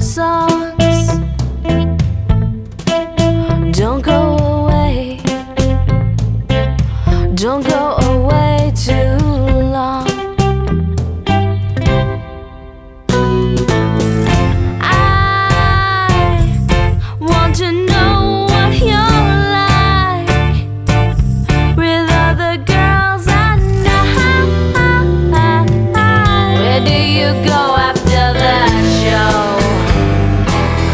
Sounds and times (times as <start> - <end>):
Music: 0.0 - 30.9.